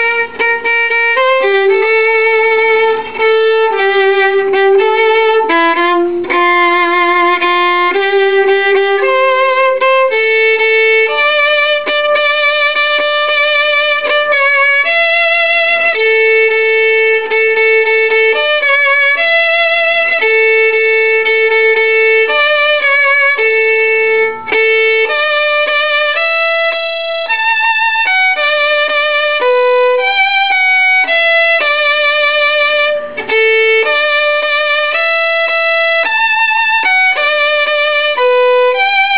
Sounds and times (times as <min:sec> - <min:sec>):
Violin, fiddle: 0:00.0 - 0:39.1.